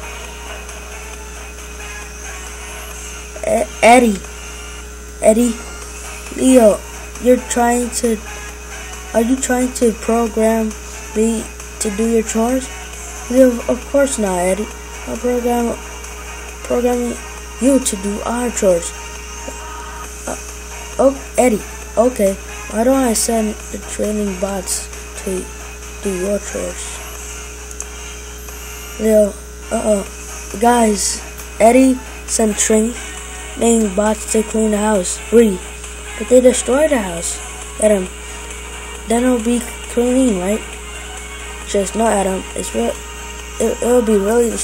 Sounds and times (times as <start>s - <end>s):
Music: 0.0s - 44.6s
Speech: 3.4s - 4.2s, 5.2s - 5.6s, 6.3s - 8.2s, 9.1s - 12.7s, 13.3s - 15.8s, 16.6s - 18.9s, 21.0s - 27.0s, 29.0s - 33.0s, 33.6s - 38.1s, 39.1s - 40.7s, 41.7s - 43.0s, 43.6s - 44.6s.